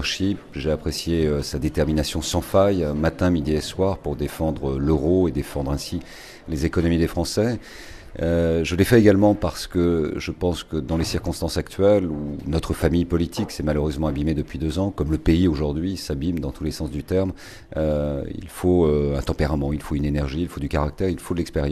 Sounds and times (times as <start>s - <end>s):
Speech: 0.0s - 7.6s, 8.2s - 21.7s.